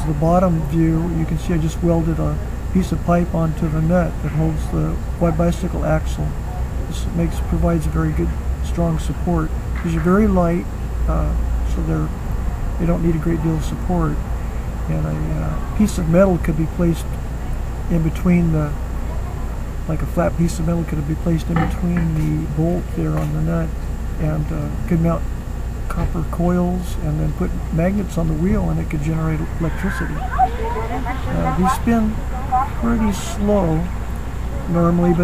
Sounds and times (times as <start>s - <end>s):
Speech: 0.0s - 12.2s, 12.8s - 14.2s, 14.9s - 17.2s, 17.9s - 18.8s, 19.9s - 25.3s, 25.9s - 35.2s.